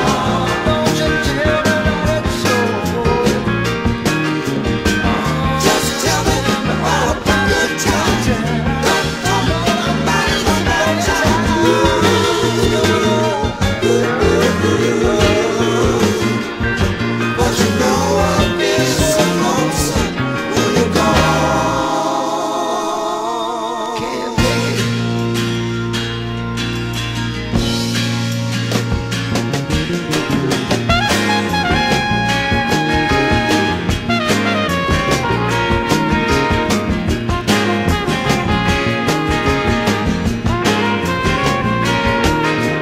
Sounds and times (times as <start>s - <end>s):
Ska: 0.0s - 42.8s.